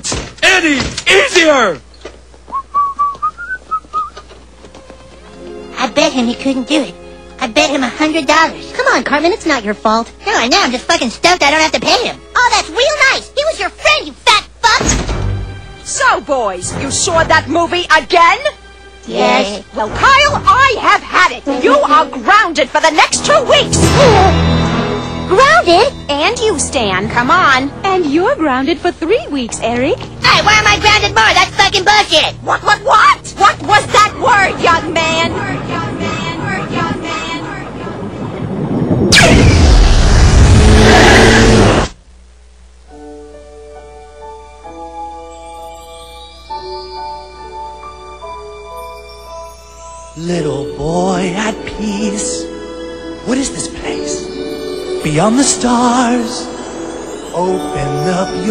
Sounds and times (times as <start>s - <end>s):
Chime: 45.0s - 51.8s, 54.0s - 58.5s.